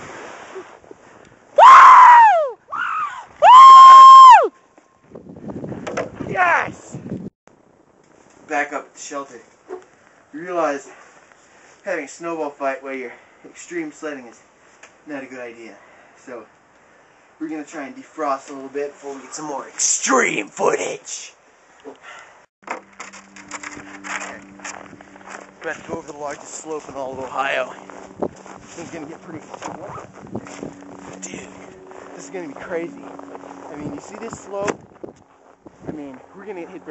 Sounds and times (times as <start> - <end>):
Speech: 17.4 - 21.4, 25.6 - 27.8, 28.8 - 29.5, 32.2 - 33.0, 33.7 - 34.8, 35.9 - 36.9.